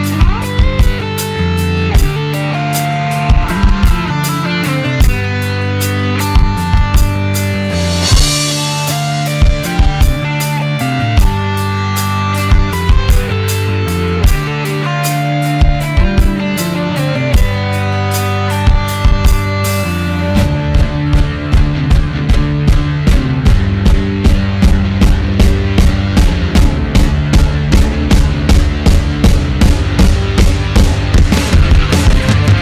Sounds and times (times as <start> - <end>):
Bass drum: 0.0 - 32.6
Drum kit: 0.0 - 32.6
Rimshot: 6.3 - 10.4, 20.4 - 32.6.